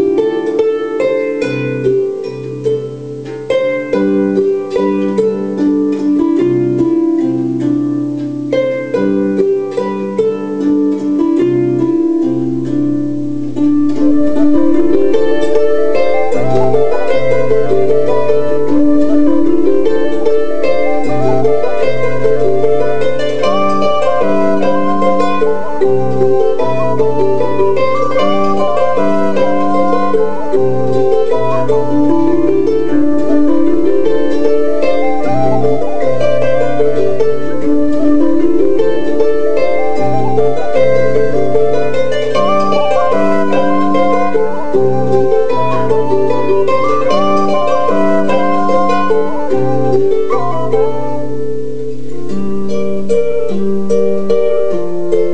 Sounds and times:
Musical instrument: 0:00.0 - 0:55.3.

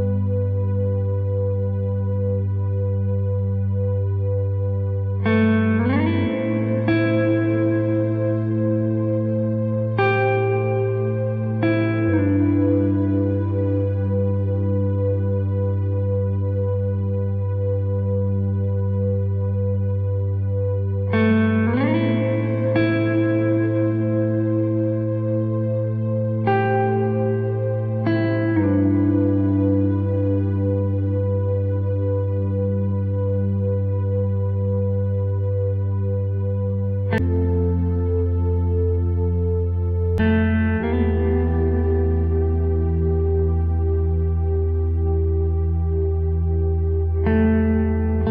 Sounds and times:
Music: 0:00.0 - 0:48.3.

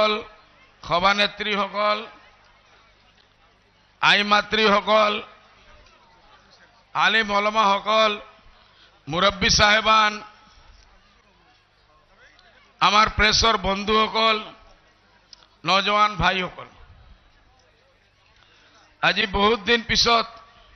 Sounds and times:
Narration, monologue: 0:00.0 - 0:02.2, 0:03.9 - 0:05.6, 0:06.8 - 0:10.7, 0:11.6 - 0:14.7, 0:15.3 - 0:16.8, 0:18.3 - 0:20.5
Male speech, man speaking: 0:00.0 - 0:02.3, 0:03.4 - 0:08.4, 0:09.1 - 0:10.4, 0:11.2 - 0:15.0, 0:15.6 - 0:16.8, 0:18.8 - 0:20.6.

